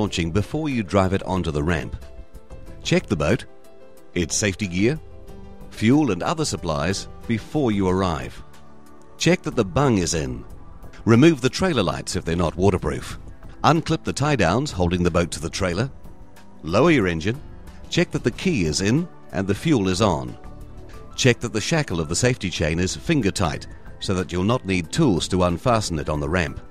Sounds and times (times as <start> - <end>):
Speech: 0.0 - 2.0, 2.9 - 3.5, 4.1 - 5.0, 5.8 - 8.4, 9.2 - 10.4, 11.0 - 15.9, 16.6 - 20.4, 21.2 - 26.6
Music: 0.0 - 26.7.